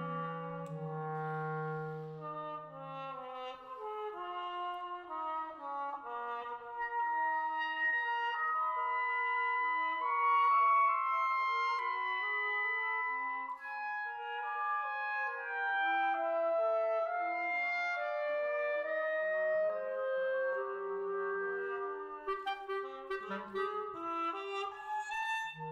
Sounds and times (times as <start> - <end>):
Trumpet: 0.0 - 25.7.